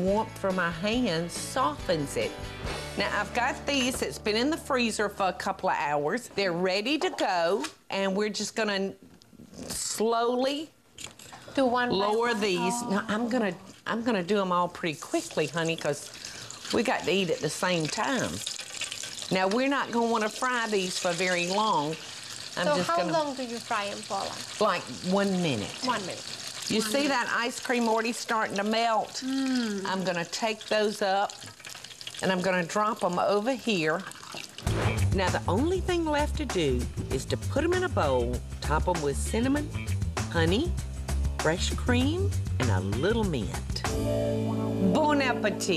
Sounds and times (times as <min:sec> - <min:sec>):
Frying (food): 0:12.1 - 0:43.8.